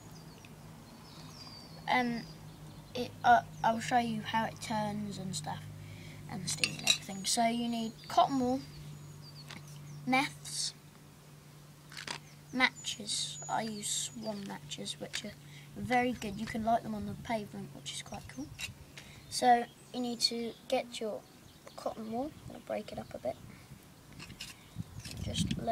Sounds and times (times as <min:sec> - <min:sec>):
Speech: 0:01.9 - 0:02.3, 0:03.0 - 0:05.6, 0:06.3 - 0:08.7, 0:10.1 - 0:10.8, 0:12.5 - 0:18.5, 0:19.3 - 0:23.4, 0:25.1 - 0:25.7.